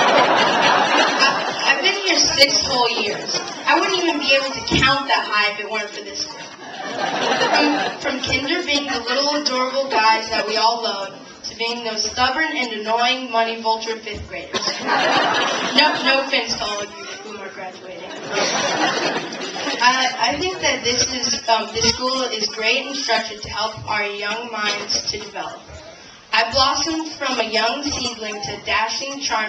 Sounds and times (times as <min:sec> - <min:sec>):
Narration, monologue: 0:01.1 - 0:29.4
Child speech, kid speaking: 0:01.7 - 0:06.5, 0:07.6 - 0:14.6, 0:15.8 - 0:18.0, 0:19.8 - 0:25.6, 0:26.4 - 0:29.4.